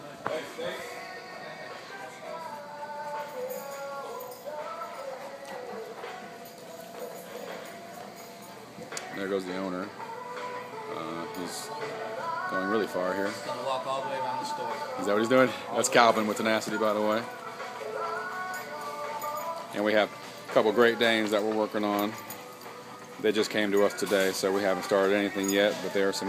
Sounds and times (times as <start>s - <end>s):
Music: 0.0s - 26.2s.